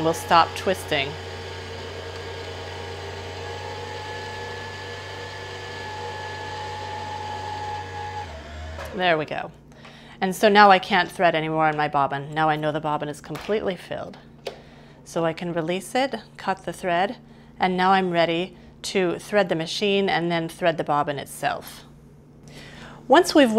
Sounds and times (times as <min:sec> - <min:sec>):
Speech: 0:00.0 - 0:01.2, 0:08.9 - 0:09.6, 0:10.2 - 0:14.2, 0:15.1 - 0:21.9, 0:23.1 - 0:23.5.